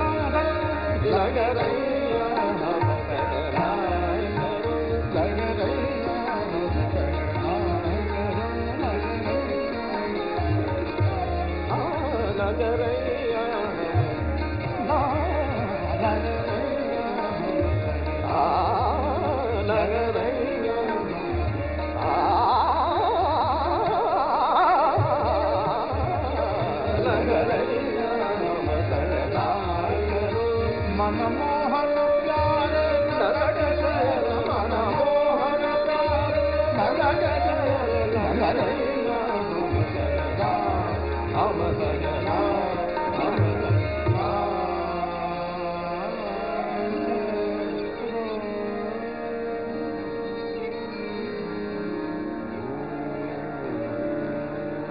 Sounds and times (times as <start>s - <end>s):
Carnatic music: 0.0s - 54.9s.